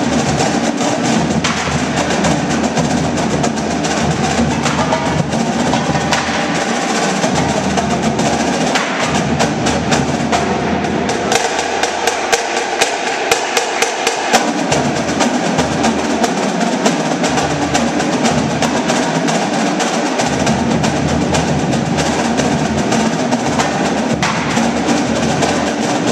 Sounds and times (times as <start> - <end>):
Music: 0.0 - 26.1.